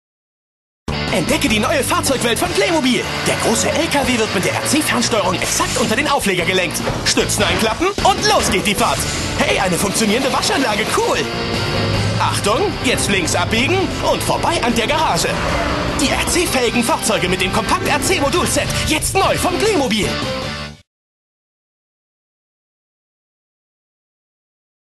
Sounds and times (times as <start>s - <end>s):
Music: 0.9s - 20.9s
Speech: 1.1s - 11.3s, 12.2s - 15.4s, 16.0s - 20.2s
Vehicle: 10.7s - 16.3s.